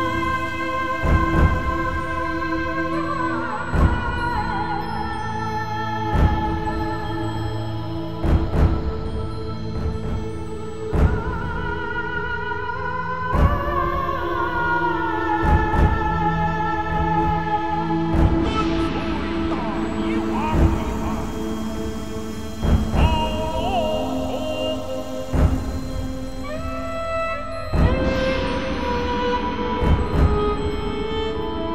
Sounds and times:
Sad music: 0.0 - 31.7.

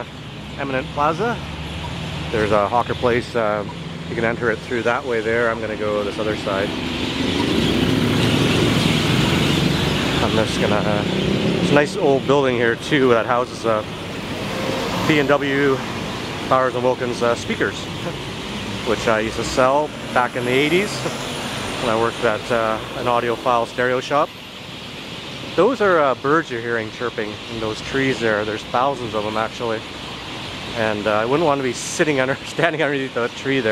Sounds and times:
Speech: 0.0 - 1.4, 2.3 - 6.7, 10.2 - 13.9, 15.0 - 15.8, 16.5 - 18.2, 18.9 - 21.1, 21.8 - 24.3, 25.6 - 29.8, 30.8 - 33.7.

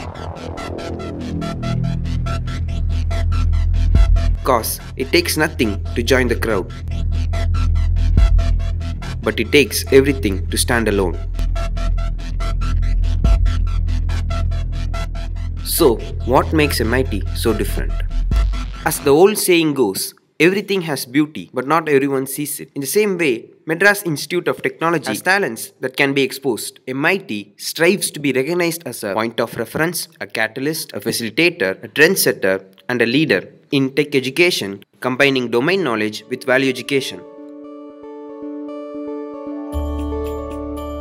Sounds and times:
Speech: 4.4 - 6.7, 9.2 - 11.2, 15.6 - 18.0, 18.8 - 37.2.

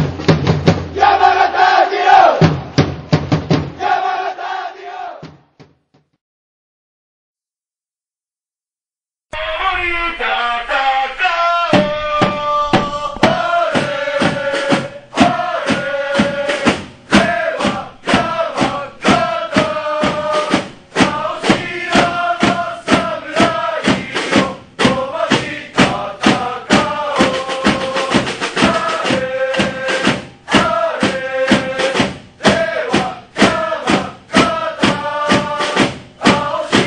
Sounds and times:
Chant: 9.3 - 36.8.

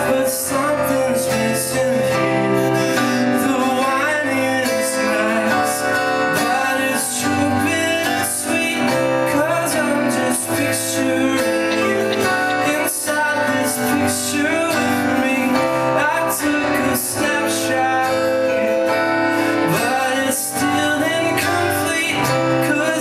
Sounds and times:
Male singing: 0.0 - 23.0
Music: 0.0 - 23.0.

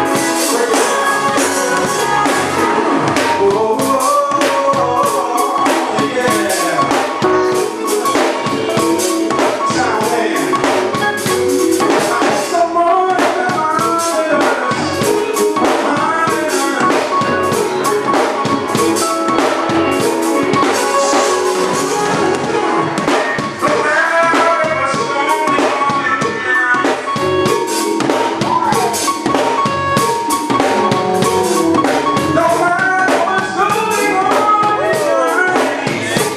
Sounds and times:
Music: 0.0 - 36.3
Male singing: 0.2 - 2.6, 3.2 - 7.6, 8.8 - 11.0, 11.9 - 17.3, 23.6 - 27.2, 32.4 - 36.3.

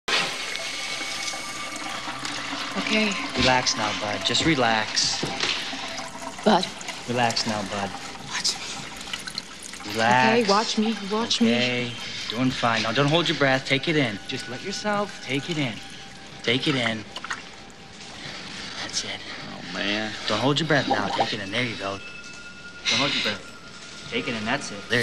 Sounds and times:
Water: 0.1 - 25.0.

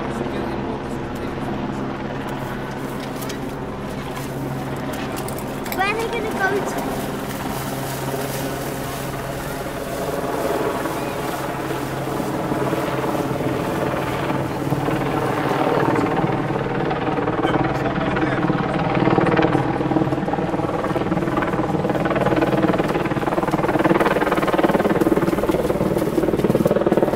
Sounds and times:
Vehicle: 0.0 - 27.1.

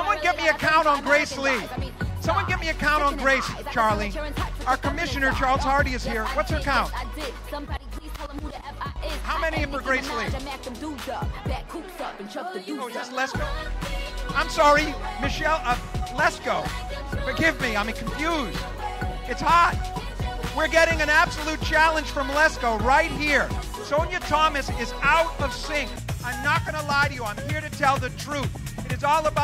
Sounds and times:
Speech: 0.0 - 7.0, 9.1 - 10.6, 14.3 - 18.6, 19.3 - 19.8, 20.6 - 29.4
Music: 0.0 - 29.4.

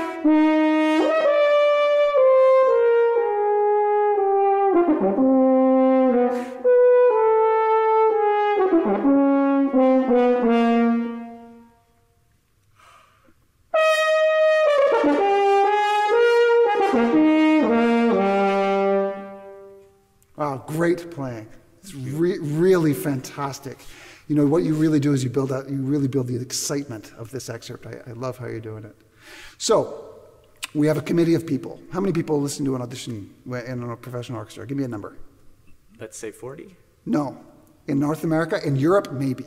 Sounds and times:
French horn: 0.0 - 12.2, 13.7 - 23.3.

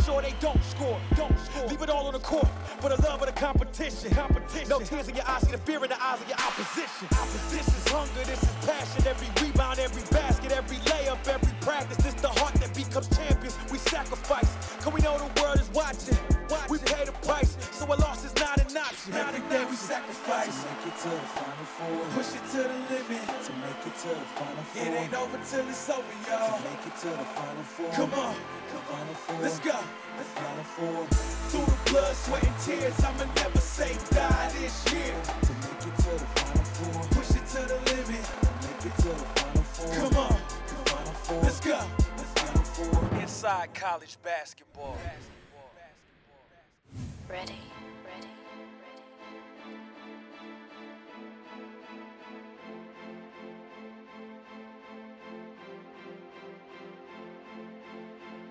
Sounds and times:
Music: 0.0 - 45.4, 47.3 - 58.5.

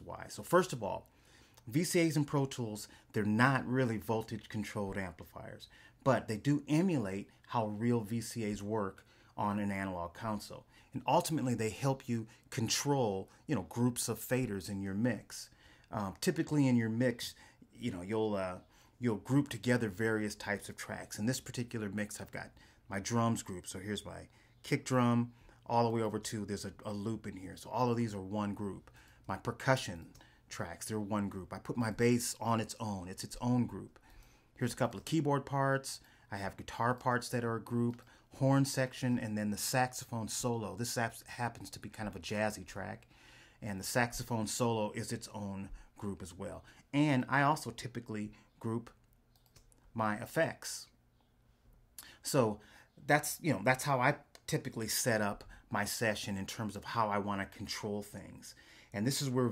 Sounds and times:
Speech: 0.0 - 34.0, 34.6 - 49.0, 49.9 - 51.0, 52.0 - 59.5.

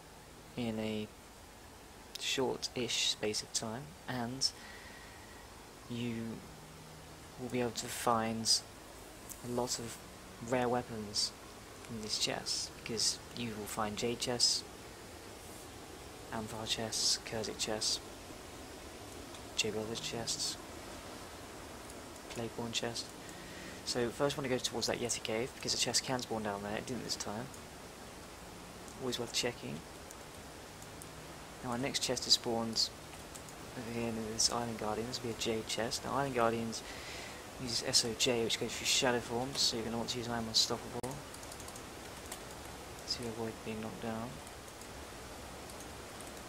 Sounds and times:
Speech: 0.6 - 1.2, 2.2 - 4.6, 5.9 - 6.4, 7.4 - 8.7, 9.4 - 14.7, 16.3 - 18.0, 19.6 - 20.6, 22.3 - 23.1, 23.9 - 27.6, 29.0 - 29.8, 31.6 - 33.0, 33.8 - 36.8, 37.6 - 41.2, 43.1 - 44.4.

